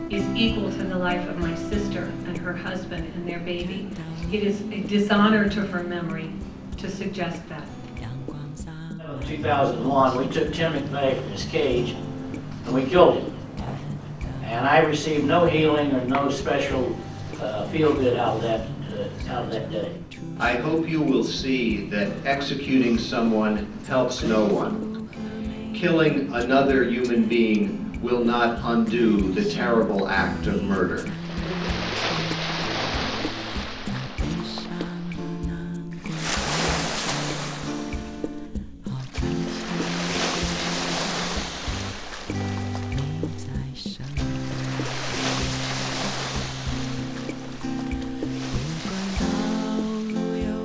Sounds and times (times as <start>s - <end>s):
Narration, monologue: 0.0s - 32.2s
Music: 0.0s - 50.6s
Male speech, man speaking: 9.0s - 12.0s, 12.7s - 13.3s, 14.4s - 24.9s, 25.8s - 31.1s.